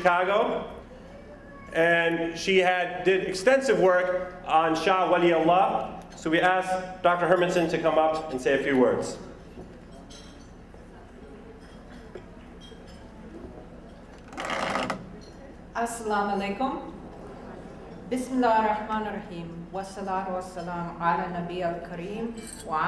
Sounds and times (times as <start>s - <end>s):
Female speech, woman speaking: 15.8s - 17.0s, 18.1s - 22.8s.